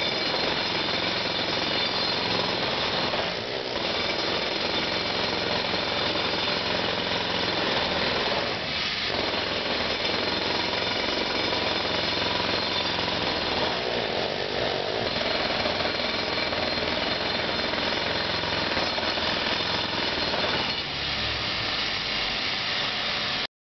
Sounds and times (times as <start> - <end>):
Jackhammer: 0.0 - 23.5.